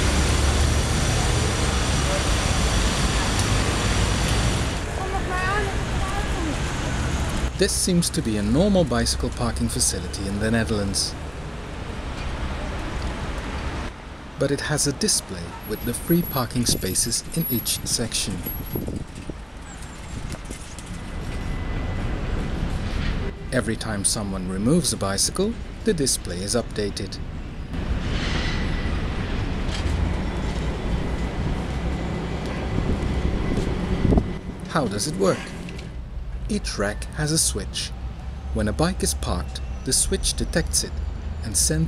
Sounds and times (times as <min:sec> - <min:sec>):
Speech: 0:07.6 - 0:11.2, 0:14.4 - 0:18.5, 0:23.6 - 0:27.2, 0:34.7 - 0:35.5, 0:36.5 - 0:37.9, 0:38.6 - 0:41.8.